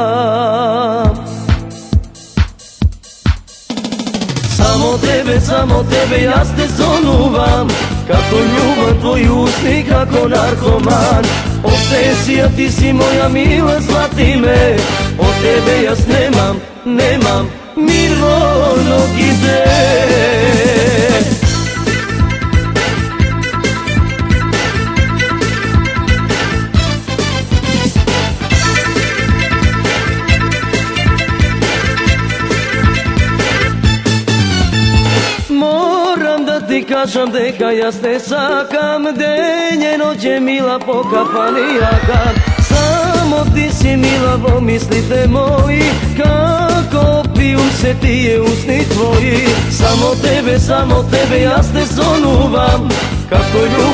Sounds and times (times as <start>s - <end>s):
Music: 0.0s - 53.9s.